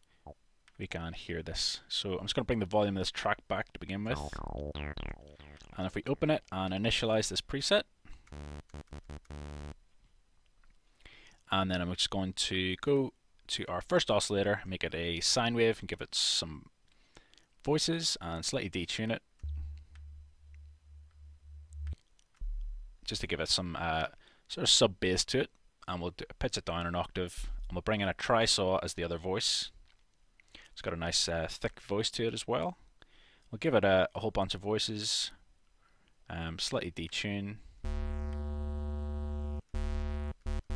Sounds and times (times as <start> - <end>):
Speech: 0.8 - 4.4, 5.8 - 7.9, 11.5 - 16.7, 17.6 - 19.2, 23.1 - 29.8, 30.8 - 32.8, 33.5 - 35.4, 36.3 - 37.6
Dubstep: 4.1 - 6.2, 37.9 - 40.7.